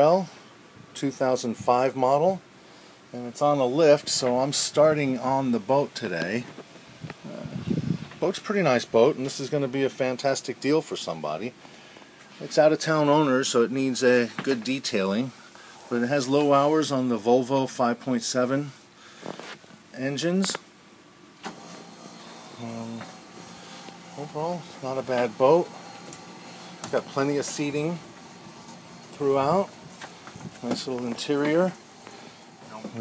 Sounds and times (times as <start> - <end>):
Speech: 0.0 - 0.4, 1.0 - 2.4, 3.1 - 6.5, 8.2 - 11.6, 12.4 - 18.8, 19.9 - 20.6, 22.6 - 23.1, 24.2 - 25.8, 26.9 - 28.1, 29.1 - 29.8, 30.6 - 31.8, 32.7 - 33.0.